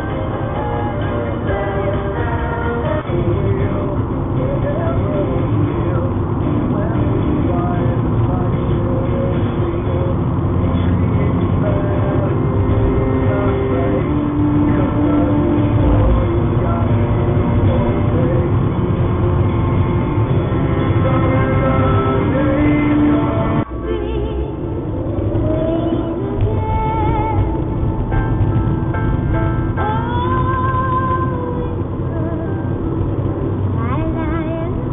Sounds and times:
Music: 0:00.0 - 0:34.9.

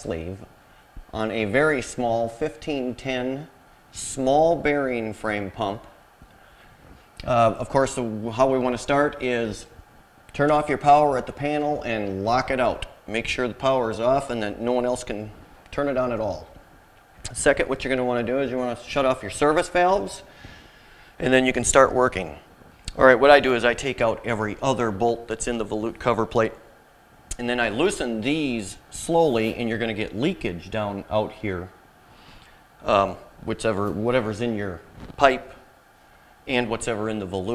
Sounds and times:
Speech: 0:00.0 - 0:00.5, 0:01.1 - 0:06.0, 0:07.2 - 0:16.6, 0:17.3 - 0:20.3, 0:21.2 - 0:26.7, 0:27.3 - 0:31.8, 0:32.8 - 0:35.6, 0:36.5 - 0:37.5.

